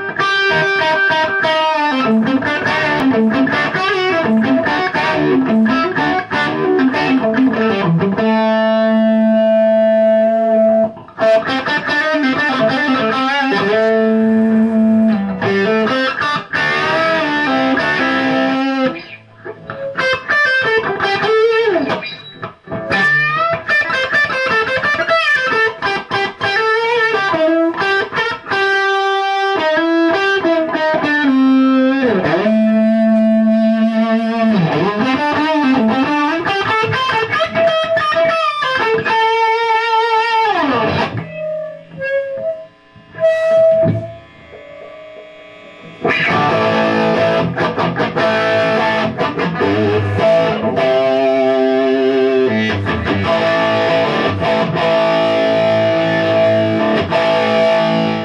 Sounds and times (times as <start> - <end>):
Guitar: 0.0 - 58.2
Inside, small room: 0.0 - 58.2.